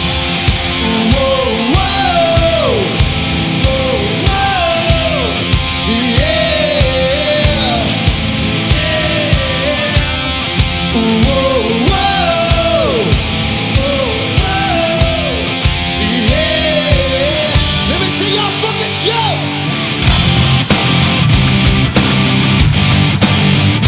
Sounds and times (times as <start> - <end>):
Electric guitar: 0.0 - 23.8.